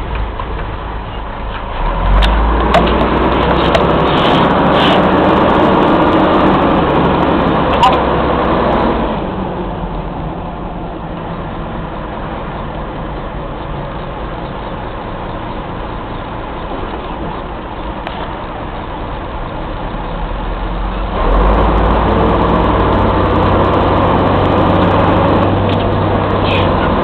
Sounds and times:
Medium engine (mid frequency): 0:00.0 - 0:27.0
Vehicle: 0:00.0 - 0:27.0.

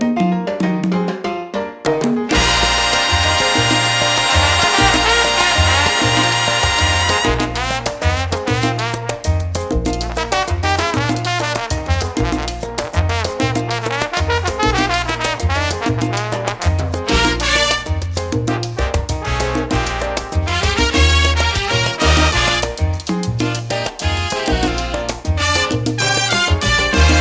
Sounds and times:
Music: 0:00.0 - 0:27.2.

